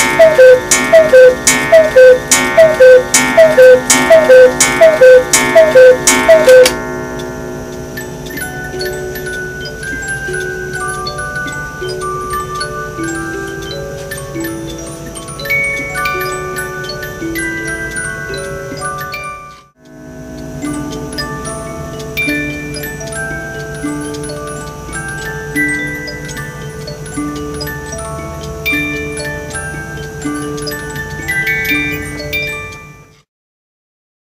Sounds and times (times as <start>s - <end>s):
Music: 0.0s - 33.3s.